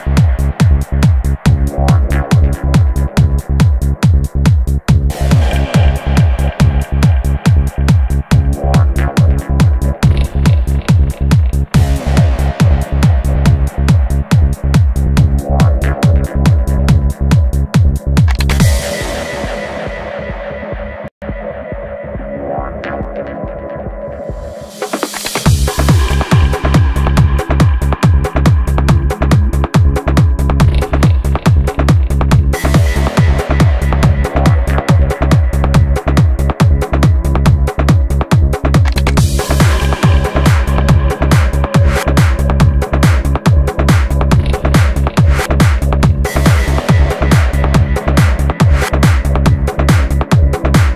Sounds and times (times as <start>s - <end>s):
Music: 0.0s - 50.9s.